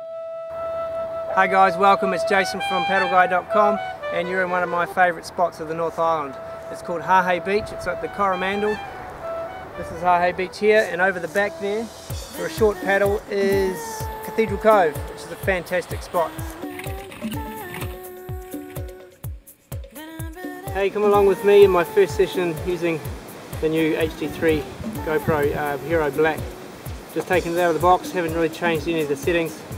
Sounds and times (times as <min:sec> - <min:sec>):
Music: 0:00.0 - 0:29.7
Speech: 0:01.3 - 0:08.8, 0:09.8 - 0:16.4, 0:20.8 - 0:26.5, 0:27.2 - 0:29.6.